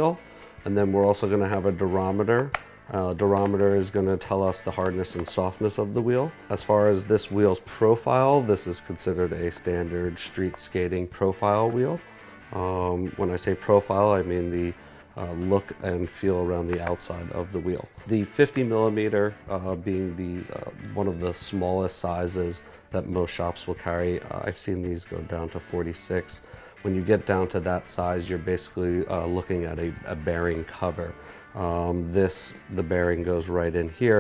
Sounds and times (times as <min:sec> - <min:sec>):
Music: 0:00.0 - 0:34.2
Speech: 0:00.0 - 0:34.2.